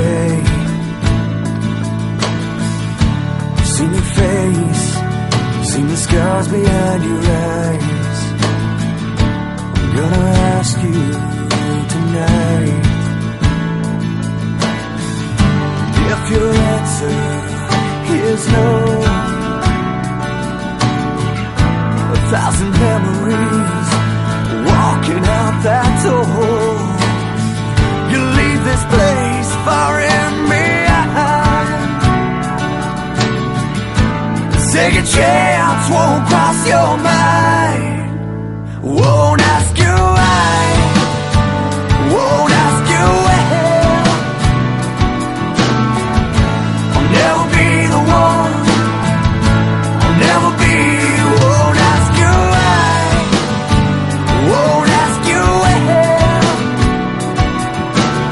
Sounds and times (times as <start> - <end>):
Music: 0.0 - 58.3.